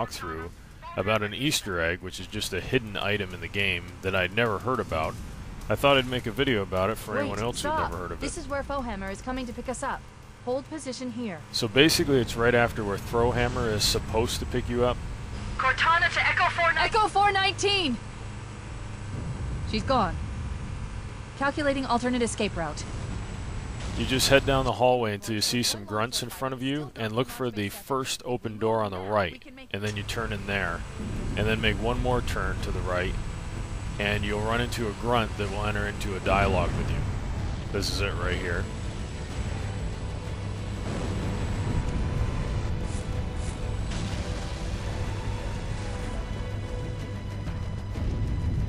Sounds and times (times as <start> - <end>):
Speech: 0.0 - 9.9, 10.5 - 15.0, 24.0 - 30.8, 31.4 - 33.2, 34.0 - 37.0, 37.8 - 38.7.